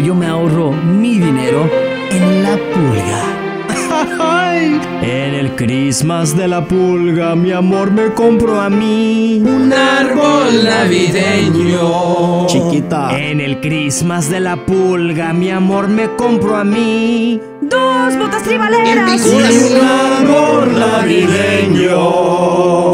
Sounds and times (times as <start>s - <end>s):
Speech: 0.0s - 6.4s, 12.5s - 13.2s, 17.6s - 20.1s
Music: 0.0s - 22.9s.